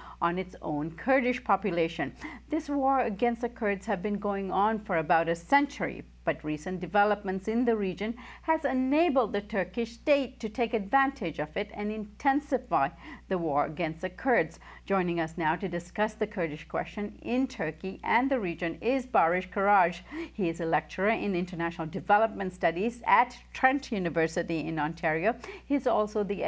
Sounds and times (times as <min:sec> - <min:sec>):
Speech: 0:00.2 - 0:26.4.